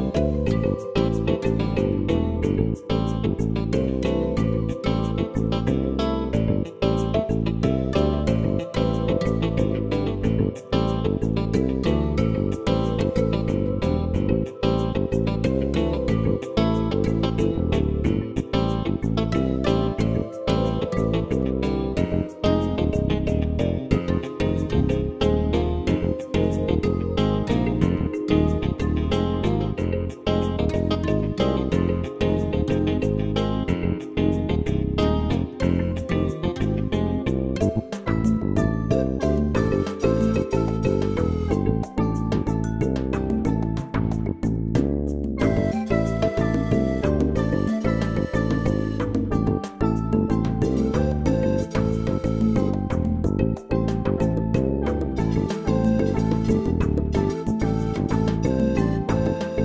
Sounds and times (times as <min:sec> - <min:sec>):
Music: 0:00.0 - 0:59.6.